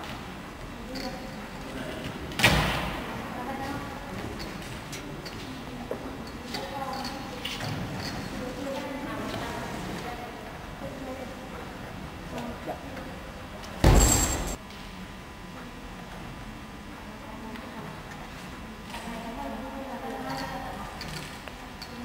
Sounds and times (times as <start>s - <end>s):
Speech: 3.0s - 13.8s, 16.9s - 18.2s, 18.8s - 22.0s.